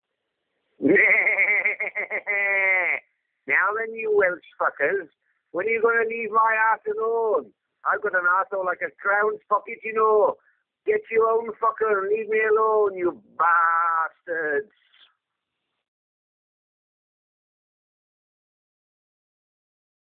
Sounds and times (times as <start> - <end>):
Speech: 2.9 - 14.8.